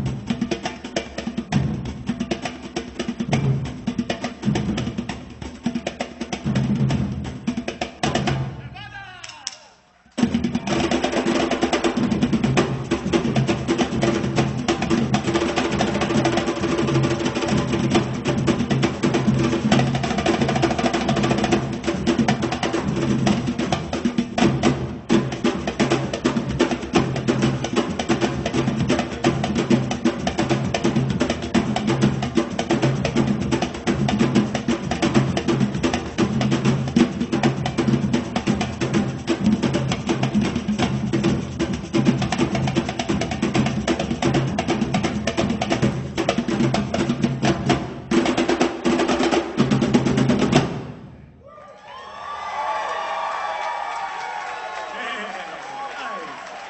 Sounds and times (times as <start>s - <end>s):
Percussion: 0.0s - 56.6s.